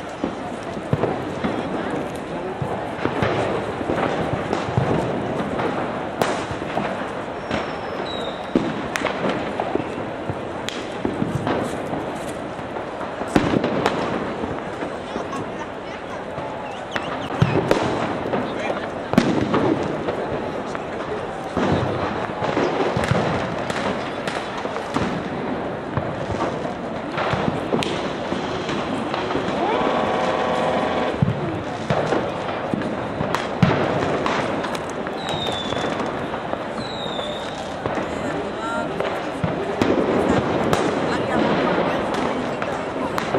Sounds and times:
Speech: 14.9 - 17.0, 18.4 - 19.2, 20.0 - 22.4, 37.4 - 43.3.

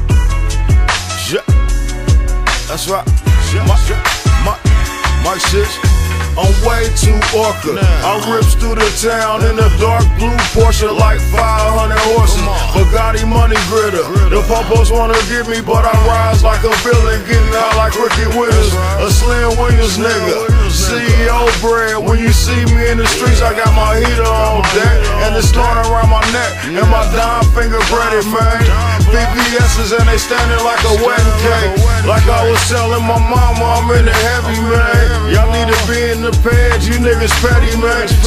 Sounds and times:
Music: 0.0 - 38.2.

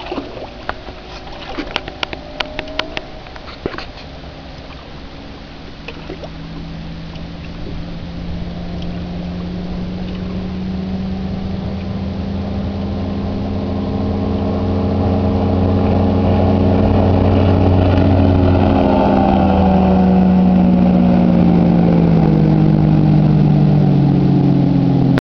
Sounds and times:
Motorboat, speedboat: 0.0 - 25.2.

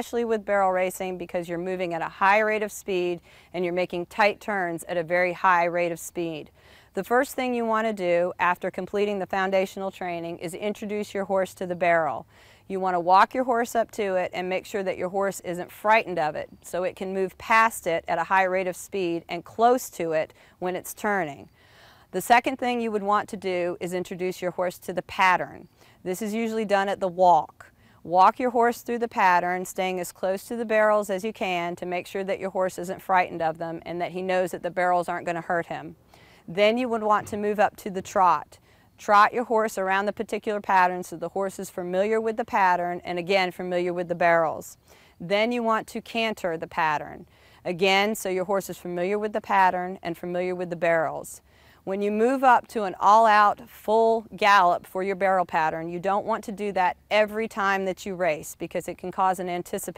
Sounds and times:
Speech: 0.0 - 21.5, 22.2 - 59.9.

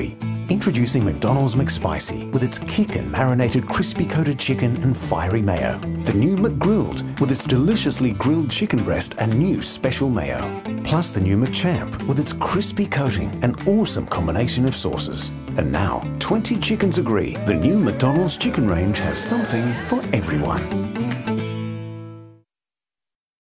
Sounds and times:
Speech: 0.0 - 20.7
Music: 0.0 - 22.5.

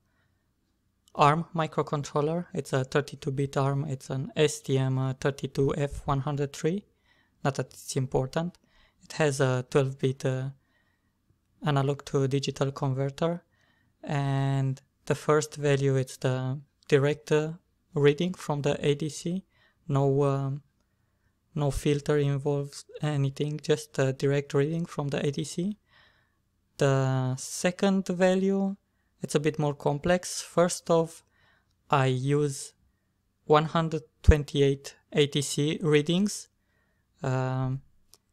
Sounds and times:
Speech: 1.1 - 10.6, 11.6 - 20.7, 21.6 - 25.8, 26.8 - 31.3, 31.9 - 32.8, 33.4 - 36.6, 37.2 - 37.9.

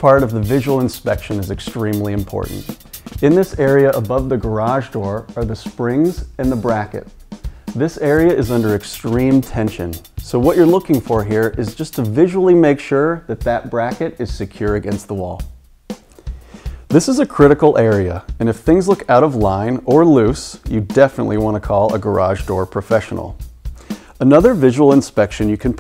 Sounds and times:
Speech: 0.0 - 7.1, 7.8 - 15.5, 16.9 - 23.4, 24.2 - 25.8
Music: 0.0 - 25.8.

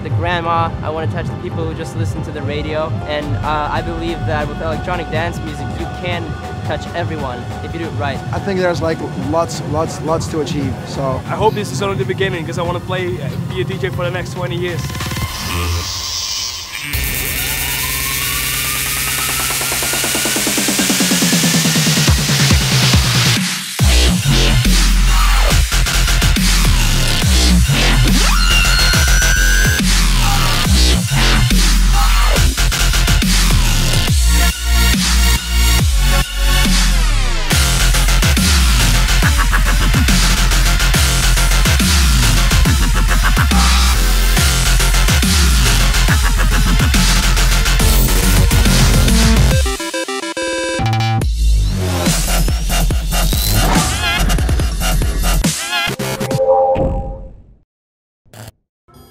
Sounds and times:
Speech: 0.0 - 15.9
Music: 0.0 - 56.5
Outside, urban or manmade: 0.0 - 57.7.

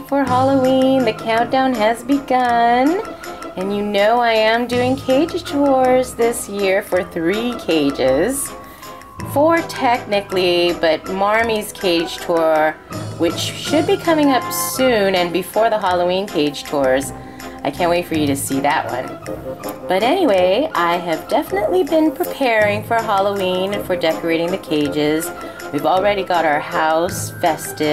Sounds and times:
Speech: 0.0 - 8.5, 9.2 - 19.2, 19.9 - 27.9
Music: 0.0 - 27.9.

